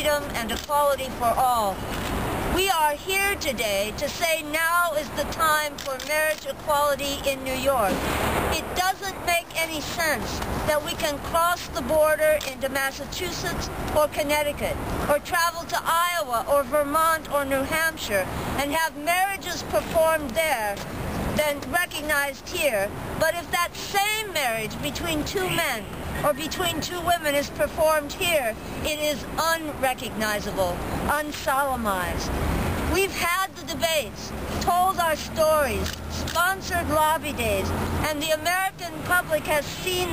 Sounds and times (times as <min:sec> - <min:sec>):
Speech: 0:00.0 - 0:01.8, 0:02.6 - 0:08.0, 0:08.6 - 0:20.8, 0:21.4 - 0:32.3, 0:32.9 - 0:40.1
Outside, urban or manmade: 0:00.0 - 0:40.1.